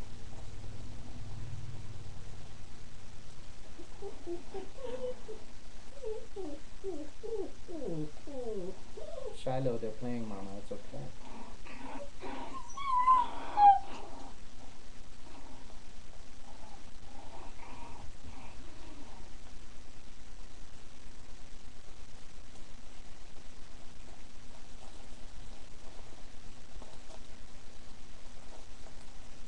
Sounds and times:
Whimper (dog): 3.8 - 5.4, 6.0 - 9.5, 11.7 - 14.1
Speech: 9.4 - 11.2.

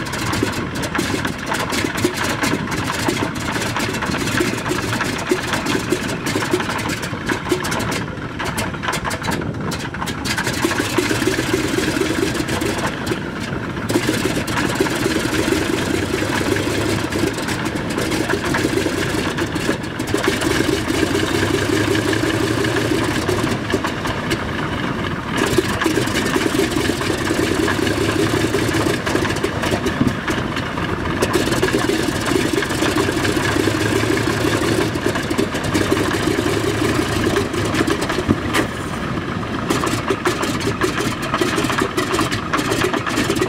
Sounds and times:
Aircraft: 0.0 - 43.4
Idling: 0.0 - 43.4
Medium engine (mid frequency): 0.0 - 43.4.

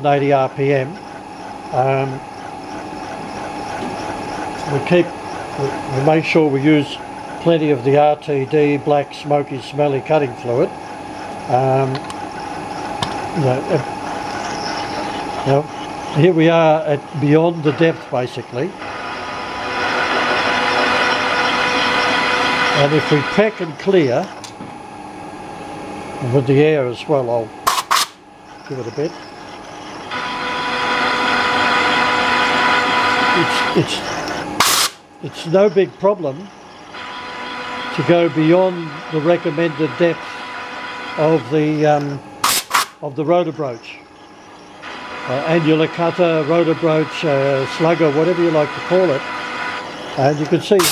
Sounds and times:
Speech: 0.0 - 1.0, 1.8 - 2.2, 4.7 - 10.7, 11.5 - 12.0, 13.4 - 13.9, 15.4 - 18.8, 22.8 - 24.3, 26.2 - 27.6, 28.7 - 29.2, 33.4 - 34.1, 35.2 - 36.5, 38.0 - 40.2, 41.2 - 42.2, 43.0 - 44.0, 45.3 - 49.2, 50.2 - 50.9
Drill: 0.0 - 9.0, 9.8 - 24.6, 27.7 - 43.0, 44.0 - 50.9.

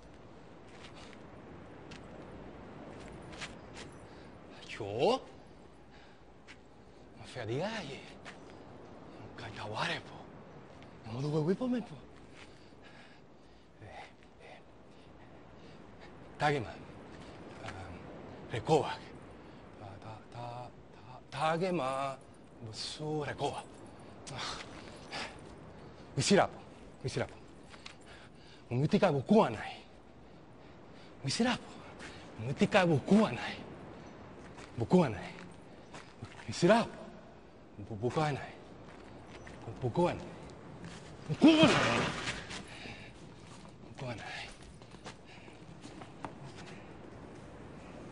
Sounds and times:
Male speech, man speaking: 4.6 - 5.4, 7.2 - 8.2, 9.2 - 10.3, 11.0 - 12.1, 16.4 - 16.8, 17.6 - 19.1, 19.8 - 23.7, 26.2 - 27.4, 28.7 - 29.8, 31.2 - 31.8, 32.4 - 33.6, 34.8 - 35.5, 36.2 - 37.1, 37.8 - 38.6, 39.6 - 40.4, 41.3 - 42.2, 44.0 - 44.6.

